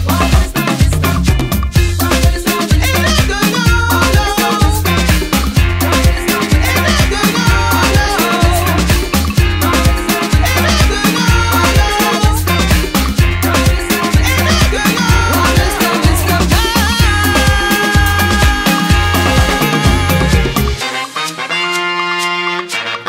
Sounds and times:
Singing: 0.0s - 4.9s, 5.7s - 12.6s, 13.3s - 20.6s
Music: 0.0s - 23.0s.

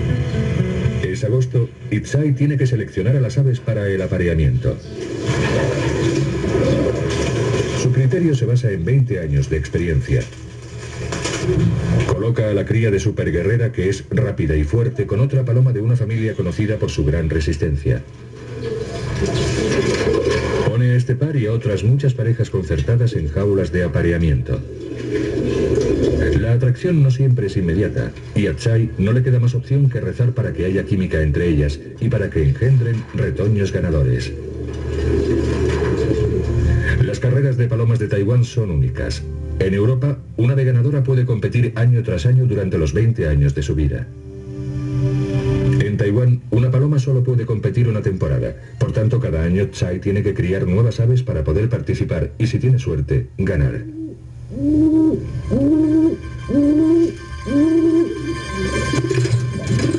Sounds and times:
Speech: 1.0s - 4.9s, 7.8s - 10.3s, 12.1s - 18.1s, 20.7s - 24.6s, 26.2s - 34.4s, 36.8s - 44.1s, 45.8s - 53.9s.

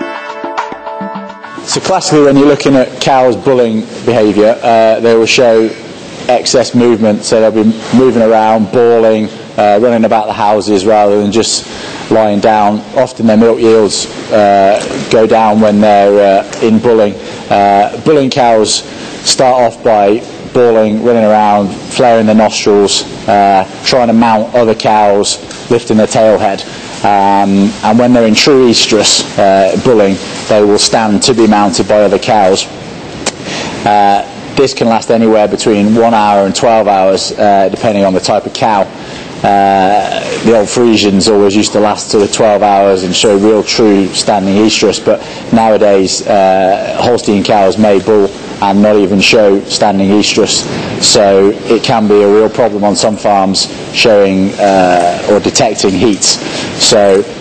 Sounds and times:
Speech: 1.7s - 32.7s, 33.8s - 57.4s.

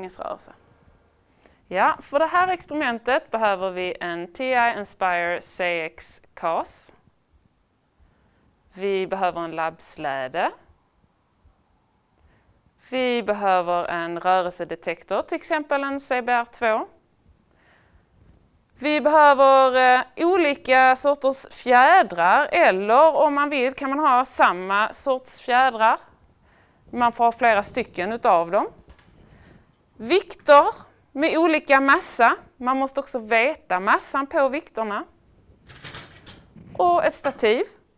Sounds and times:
Speech: 0.0s - 0.6s, 1.7s - 7.0s, 8.8s - 10.7s, 12.8s - 17.0s, 18.8s - 26.1s, 26.9s - 28.8s, 30.0s - 35.2s, 36.8s - 37.8s.

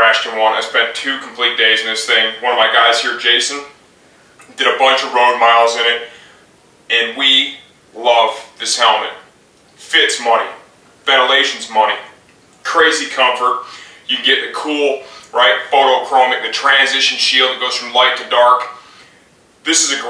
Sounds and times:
Speech: 0.0s - 3.8s, 4.4s - 6.2s, 6.9s - 18.9s, 19.6s - 20.0s.

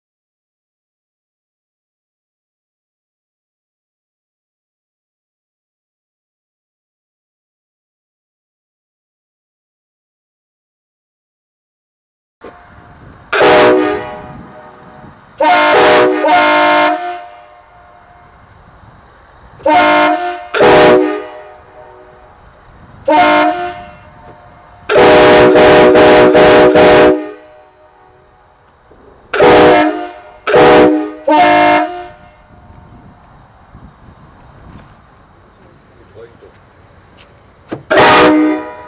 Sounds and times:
Train horn: 12.4s - 18.5s, 19.6s - 22.4s, 23.0s - 28.6s, 29.3s - 32.9s, 37.9s - 38.8s.

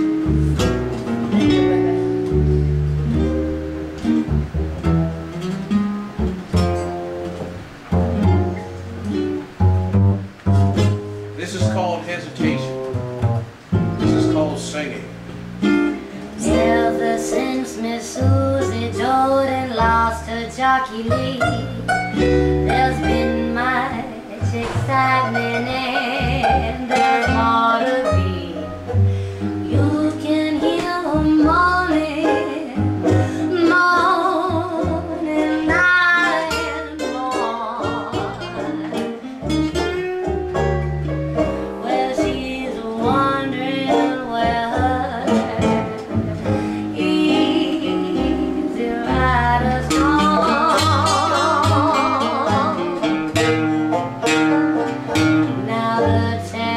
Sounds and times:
Music: 0.0s - 56.7s.

